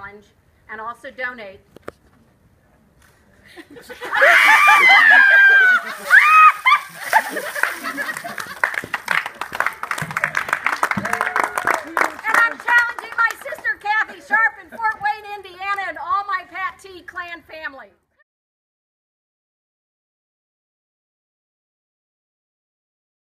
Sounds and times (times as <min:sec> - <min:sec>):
Speech: 0:00.0 - 0:01.6, 0:12.2 - 0:18.0.